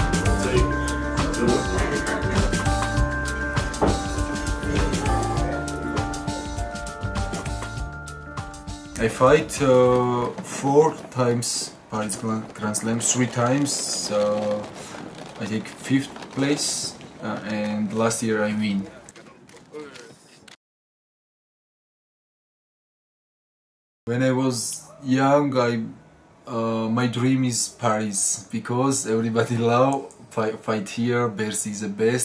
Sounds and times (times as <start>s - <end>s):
Music: 0.0s - 10.1s
Speech: 9.0s - 14.7s, 15.4s - 20.2s, 24.1s - 32.2s.